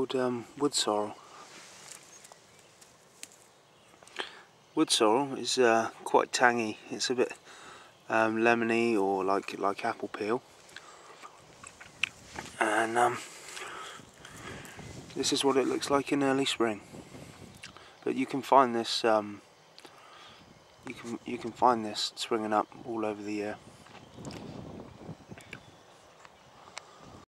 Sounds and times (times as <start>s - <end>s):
Speech: 0.0s - 1.2s, 4.8s - 7.4s, 8.1s - 10.4s, 12.6s - 13.3s, 15.2s - 16.8s, 18.0s - 19.4s, 20.8s - 23.6s.